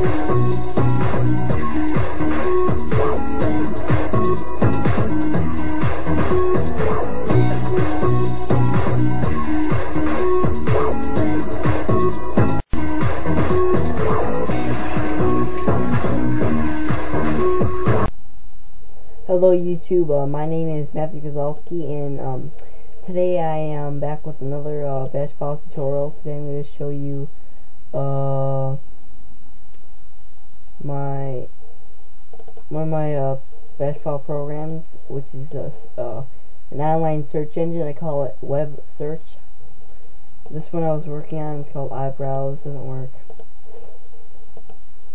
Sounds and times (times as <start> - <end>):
Speech: 19.3 - 27.3, 28.0 - 28.8, 30.8 - 31.5, 32.7 - 39.4, 40.5 - 43.2.